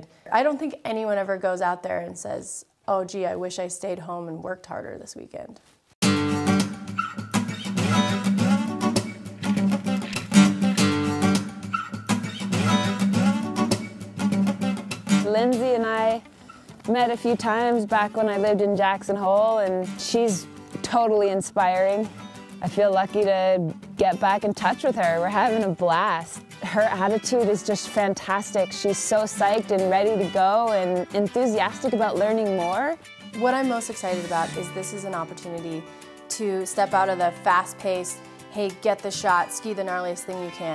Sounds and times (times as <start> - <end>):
Speech: 0.0 - 5.6, 15.3 - 16.2, 16.9 - 40.7
Music: 6.0 - 40.7.